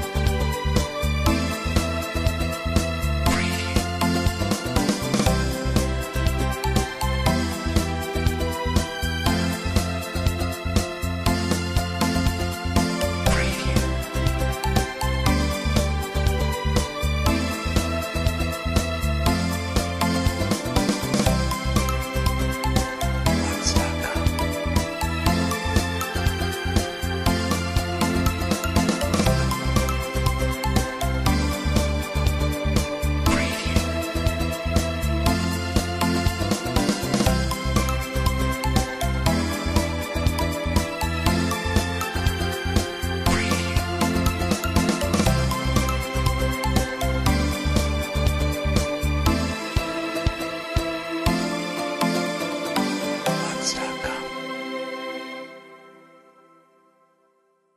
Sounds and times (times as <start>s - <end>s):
Theme music: 0.0s - 56.8s
Wedding music: 0.0s - 56.8s
Happy music: 0.0s - 57.7s.